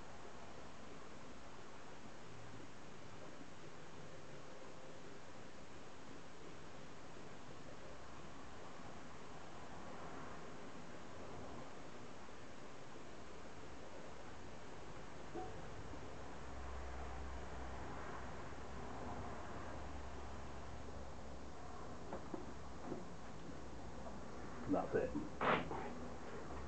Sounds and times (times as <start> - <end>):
Speech: 24.6 - 25.6.